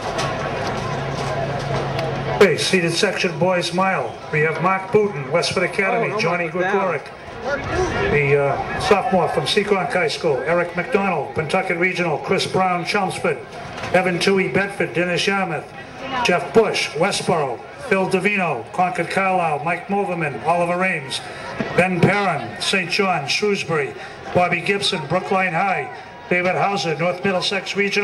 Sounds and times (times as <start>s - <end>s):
Run: 0.0s - 28.0s
Speech: 2.4s - 28.0s.